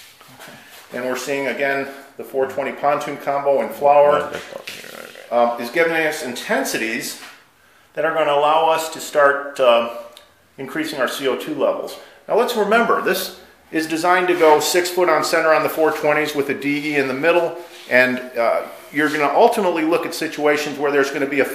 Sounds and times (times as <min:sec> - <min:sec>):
Inside, small room: 0:00.0 - 0:21.5
Speech: 0:00.9 - 0:07.3, 0:08.0 - 0:21.5.